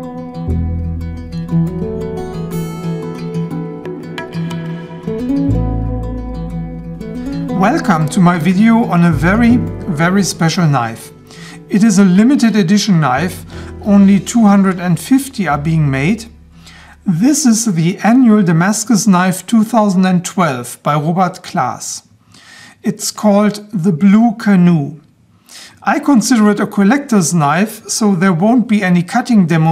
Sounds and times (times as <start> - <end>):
Music: 0.0 - 18.4
Speech: 7.6 - 11.1, 11.7 - 16.3, 17.0 - 22.1, 22.8 - 25.1, 25.8 - 29.7.